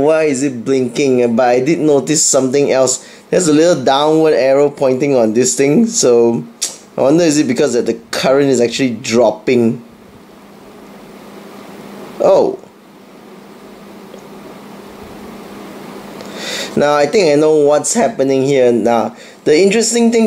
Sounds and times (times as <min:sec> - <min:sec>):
Speech: 0:00.0 - 0:09.8, 0:12.2 - 0:12.7, 0:16.8 - 0:20.2.